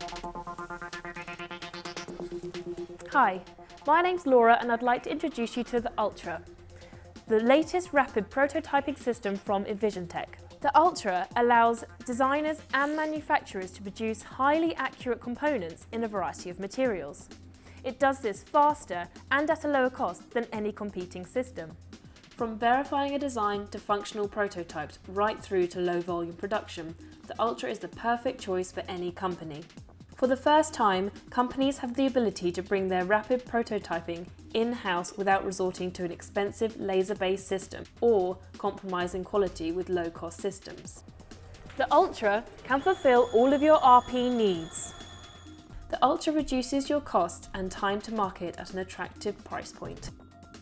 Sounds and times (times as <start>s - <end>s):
Music: 0.0s - 50.6s
Speech: 3.1s - 6.4s, 7.3s - 21.8s, 22.4s - 41.0s, 41.8s - 44.9s, 45.9s - 50.1s.